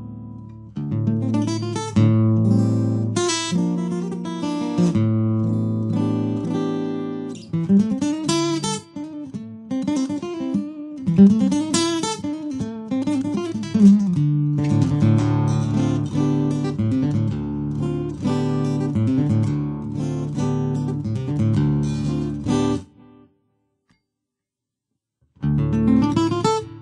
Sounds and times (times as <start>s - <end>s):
Acoustic guitar: 0.0s - 23.3s, 25.4s - 26.8s.